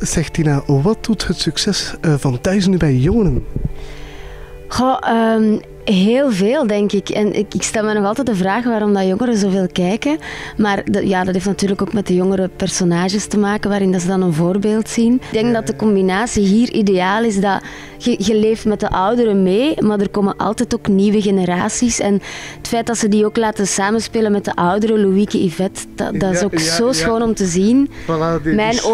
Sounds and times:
Music: 0.0s - 28.9s
Speech: 14.0s - 21.7s, 22.7s - 28.9s.

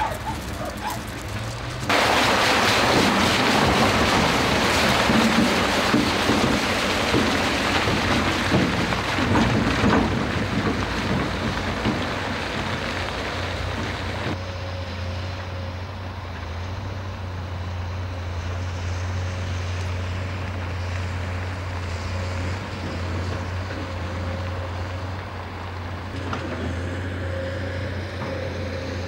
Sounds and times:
Outside, rural or natural: 0.0s - 29.0s
Vehicle: 0.0s - 29.0s.

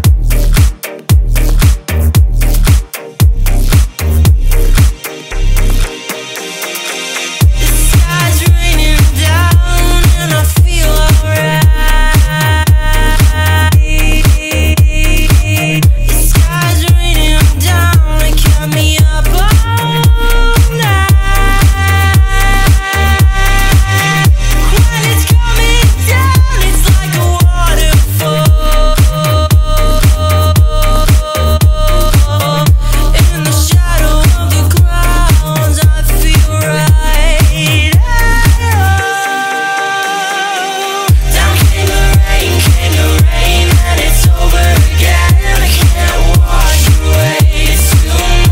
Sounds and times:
Electronic dance music: 0.0s - 48.5s.

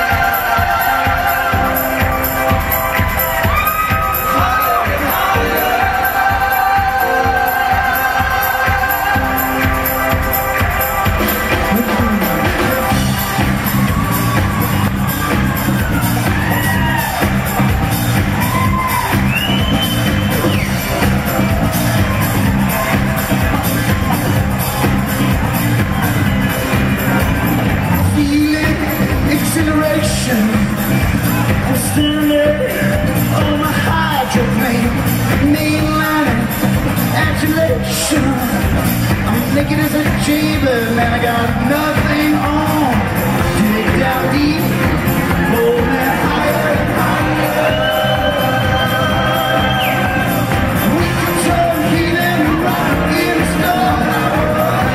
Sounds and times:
Music: 0.0s - 54.9s.

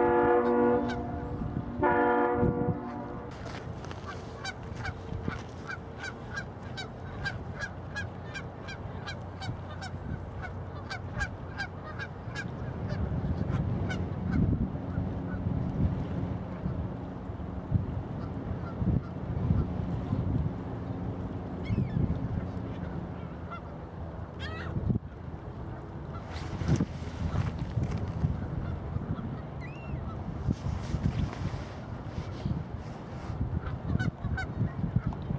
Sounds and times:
Ship: 0.0s - 35.3s
Wind noise (microphone): 0.8s - 3.1s, 12.7s - 17.0s, 17.6s - 20.7s, 21.6s - 22.6s, 24.6s - 25.2s, 26.1s - 35.3s.

